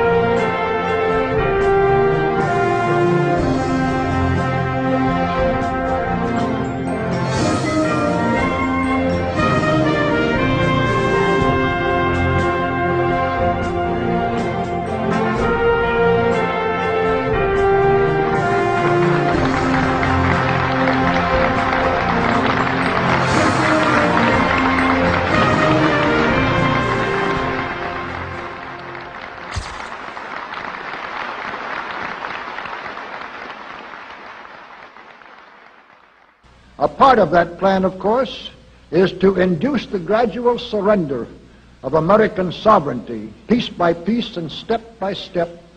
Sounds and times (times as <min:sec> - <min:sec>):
Music: 0:00.0 - 0:29.9, 0:36.4 - 0:45.7.